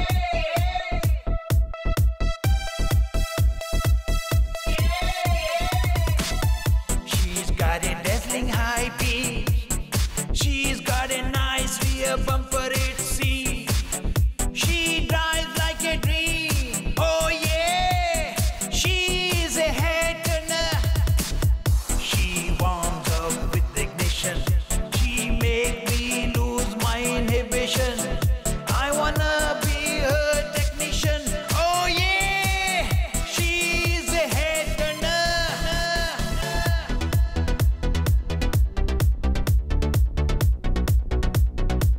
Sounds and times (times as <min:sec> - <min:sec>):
Dance music: 0:00.0 - 0:41.9.